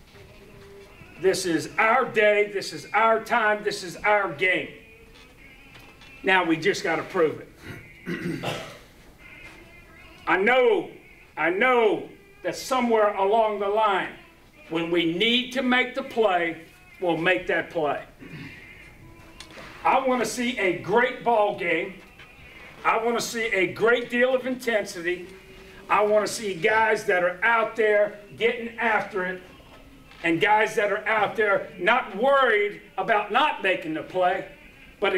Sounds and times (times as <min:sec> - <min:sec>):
Music: 0:00.0 - 0:35.1
Speech: 0:01.1 - 0:04.8, 0:06.2 - 0:07.5, 0:10.2 - 0:18.1, 0:19.8 - 0:22.0, 0:22.8 - 0:29.6, 0:30.2 - 0:35.1.